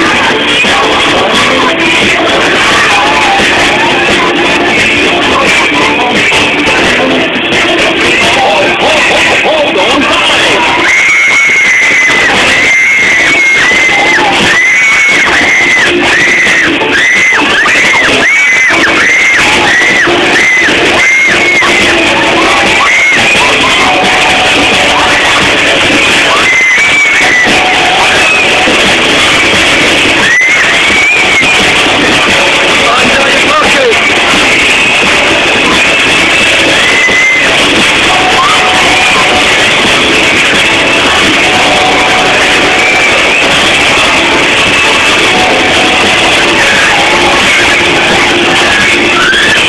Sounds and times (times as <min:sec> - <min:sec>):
Speech: 0:08.2 - 0:10.3, 0:32.8 - 0:34.1.